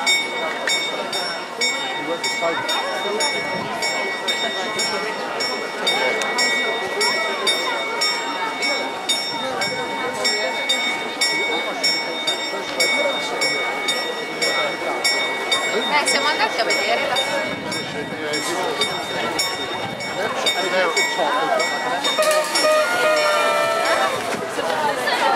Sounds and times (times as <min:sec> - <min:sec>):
Speech: 0:00.0 - 0:25.3.